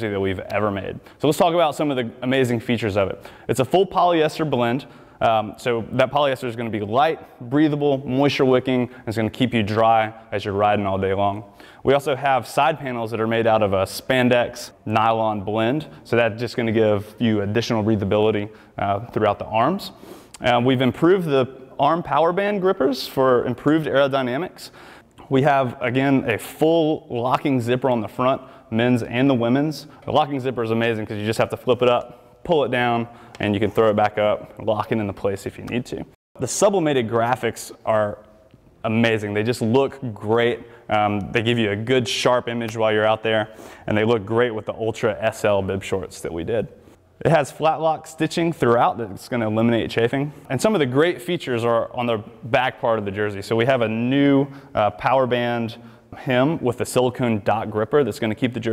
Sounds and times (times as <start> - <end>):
Speech: 0.0 - 58.7.